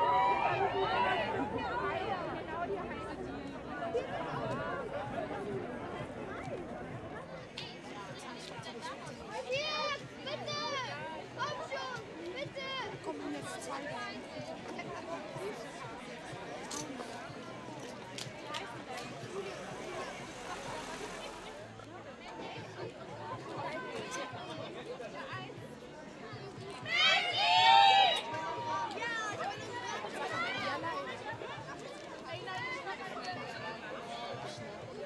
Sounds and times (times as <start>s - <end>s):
Speech: 0.3s - 35.0s.